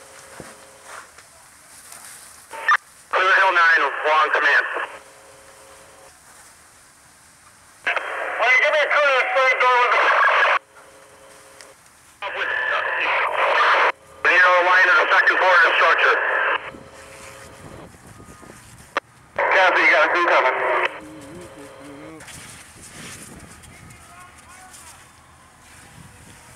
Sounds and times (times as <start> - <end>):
Fire: 0.0 - 26.5
Outside, urban or manmade: 0.0 - 26.5
Speech: 3.2 - 5.0, 7.9 - 10.6, 12.2 - 16.4, 19.4 - 22.3, 23.7 - 26.5.